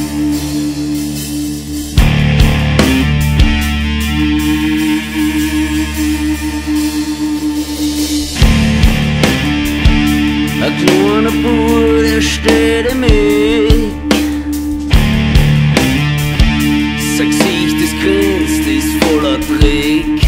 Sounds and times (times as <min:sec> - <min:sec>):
Background music: 0:00.0 - 0:20.2.